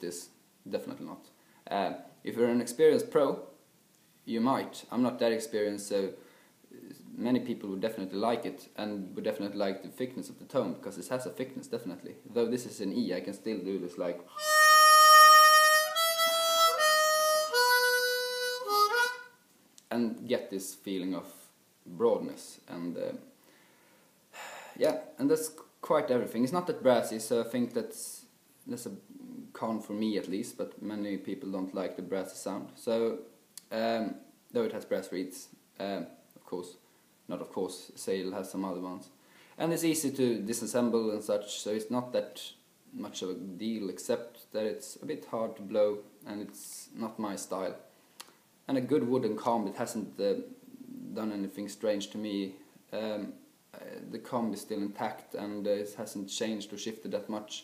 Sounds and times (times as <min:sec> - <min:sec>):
Speech: 0:00.0 - 0:03.6, 0:04.3 - 0:14.3, 0:19.9 - 0:23.3, 0:24.8 - 0:47.9, 0:48.7 - 0:57.6
Inside, small room: 0:00.0 - 0:57.6
Harmonica: 0:14.3 - 0:19.4.